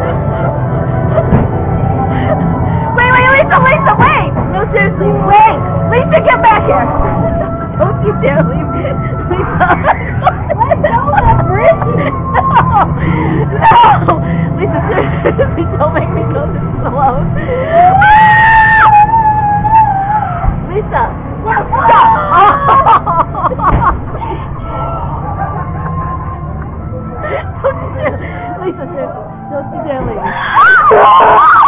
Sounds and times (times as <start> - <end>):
Music: 0.0 - 31.6.